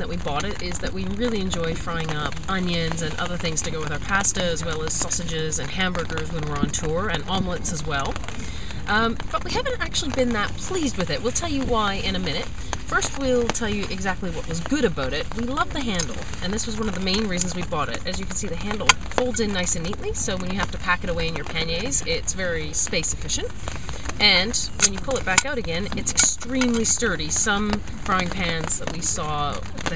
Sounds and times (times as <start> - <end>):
Speech: 0.0 - 23.5, 24.2 - 29.9.